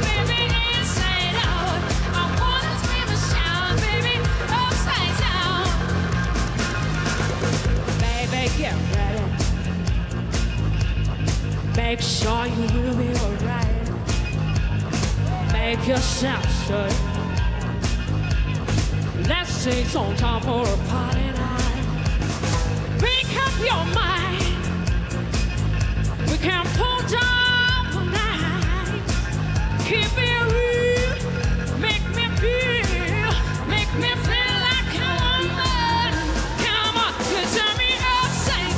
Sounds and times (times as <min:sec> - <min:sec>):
Disco: 0:00.0 - 0:38.7.